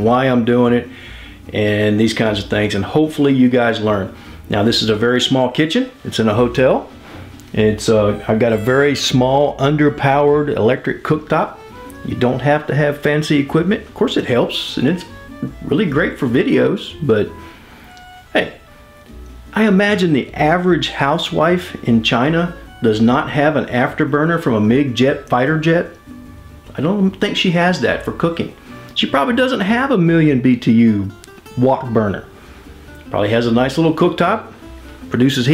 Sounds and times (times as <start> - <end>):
Speech: 0.0 - 0.9, 1.5 - 6.9, 7.5 - 17.4, 18.4 - 18.6, 19.6 - 26.0, 26.7 - 32.3, 33.1 - 34.5, 35.1 - 35.5
Music: 0.0 - 35.5.